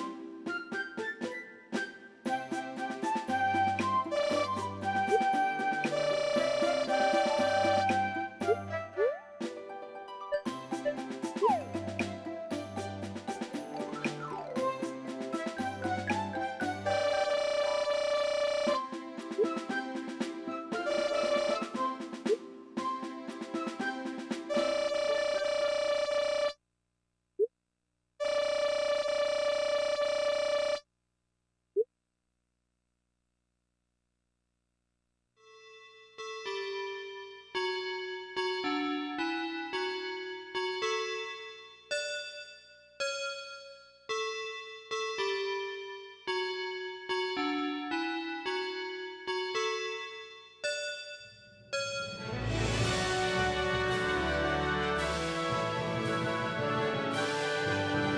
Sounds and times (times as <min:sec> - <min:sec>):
Music: 0:00.0 - 0:26.1, 0:35.4 - 0:51.1, 0:51.7 - 0:58.1.